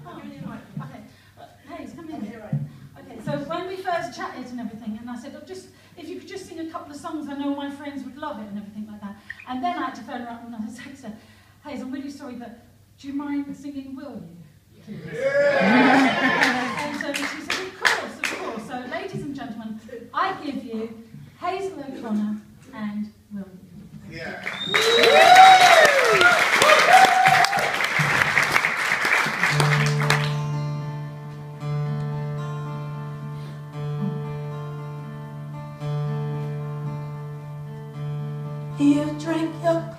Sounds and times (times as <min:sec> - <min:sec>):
Applause: 0:15.9 - 0:18.6, 0:24.3 - 0:30.6.